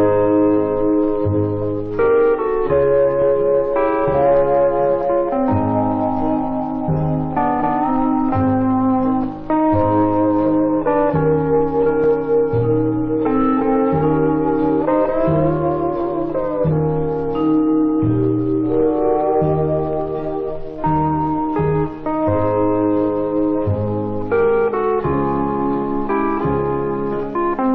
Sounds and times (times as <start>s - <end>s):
Music: 0.0s - 27.7s.